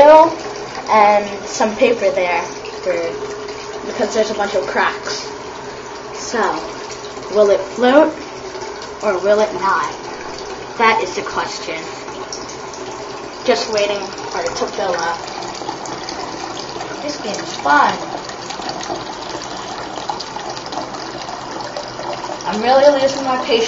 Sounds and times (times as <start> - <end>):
Water: 0.0 - 23.6
Water tap, faucet: 0.0 - 23.6.